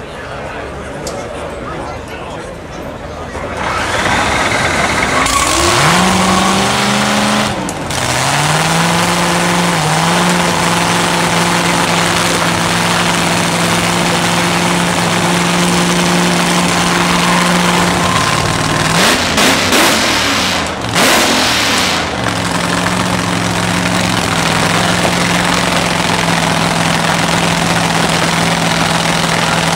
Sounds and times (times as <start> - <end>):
Car: 0.0 - 29.7.